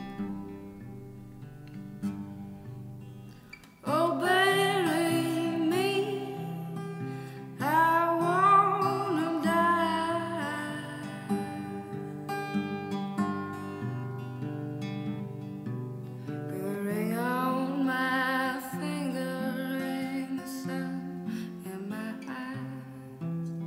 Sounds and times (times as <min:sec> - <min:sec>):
Music: 0:00.0 - 0:23.6.